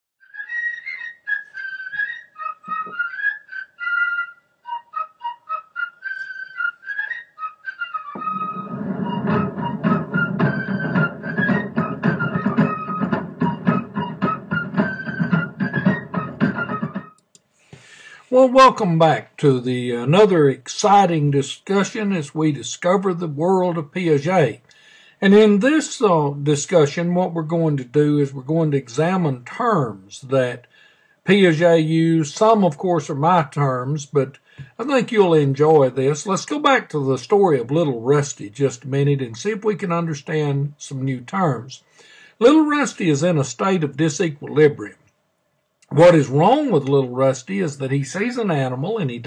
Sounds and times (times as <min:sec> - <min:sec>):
Music: 0:00.2 - 0:17.2.